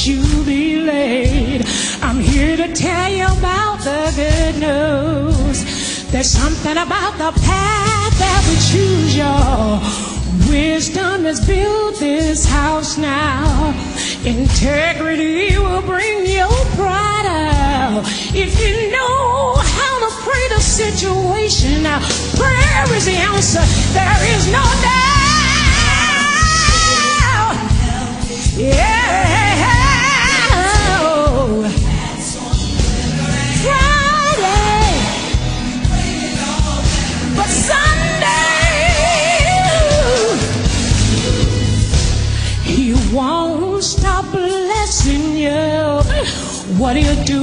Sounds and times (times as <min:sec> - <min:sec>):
Music: 0:00.0 - 0:47.4.